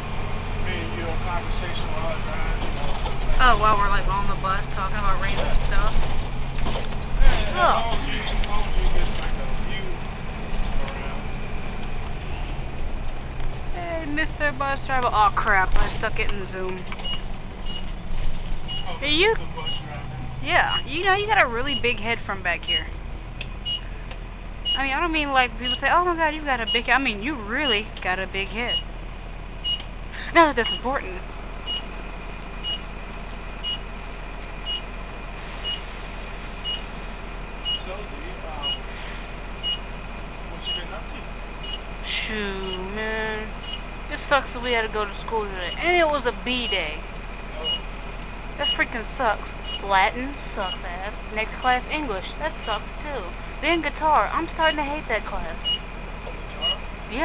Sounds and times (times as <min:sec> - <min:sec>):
Vehicle: 0:00.0 - 0:57.2
Speech: 0:00.8 - 0:05.9, 0:18.9 - 0:22.9, 0:24.8 - 0:28.8, 0:30.2 - 0:31.2, 0:37.8 - 0:38.8, 0:40.6 - 0:41.3, 0:44.1 - 0:47.0, 0:48.6 - 0:55.6.